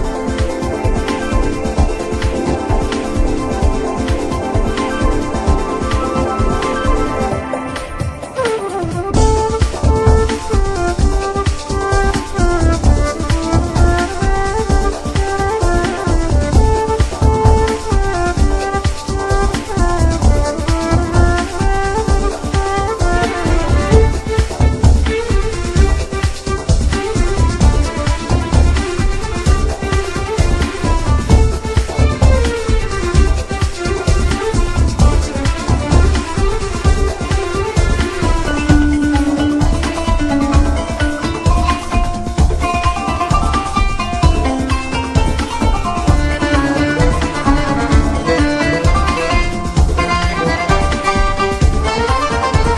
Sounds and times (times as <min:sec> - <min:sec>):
Music: 0:00.0 - 0:52.7.